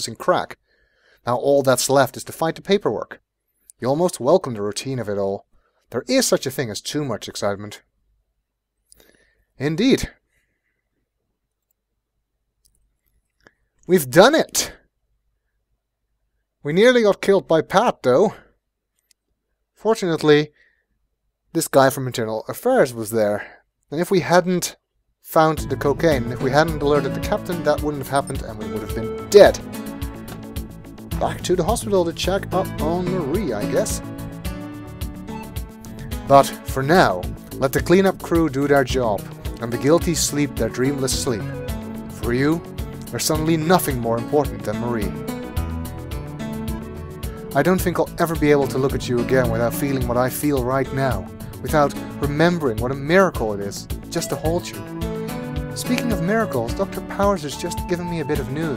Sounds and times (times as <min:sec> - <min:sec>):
Narration, monologue: 0:00.0 - 0:58.7
Music: 0:25.4 - 0:58.7.